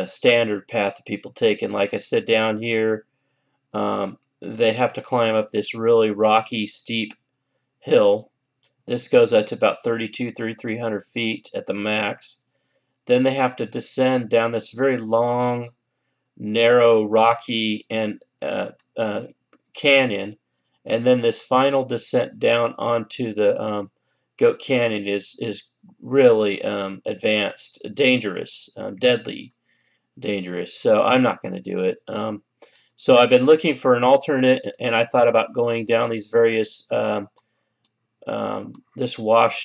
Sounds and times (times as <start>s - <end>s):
Speech: 0.0s - 3.0s, 3.8s - 7.2s, 7.9s - 8.3s, 8.9s - 12.4s, 13.1s - 15.7s, 16.4s - 29.5s, 30.2s - 37.4s, 38.2s - 39.6s.